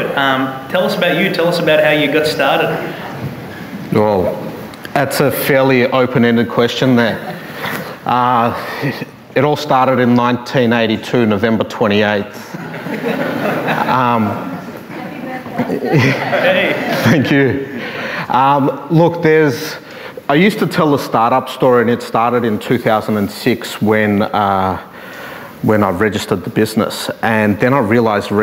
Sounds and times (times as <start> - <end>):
Speech: 0.0 - 3.1, 3.9 - 7.3, 8.1 - 12.5, 13.9 - 17.6, 18.3 - 24.9, 25.6 - 28.4.